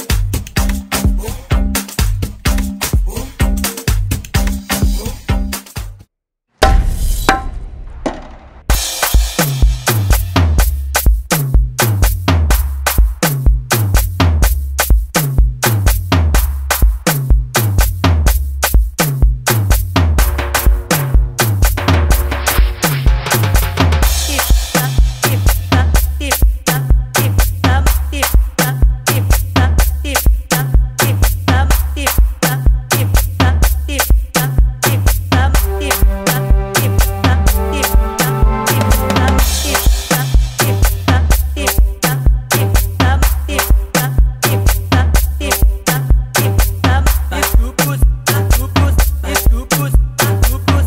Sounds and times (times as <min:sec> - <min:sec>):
Music: 0:00.0 - 0:06.1, 0:08.2 - 0:50.8.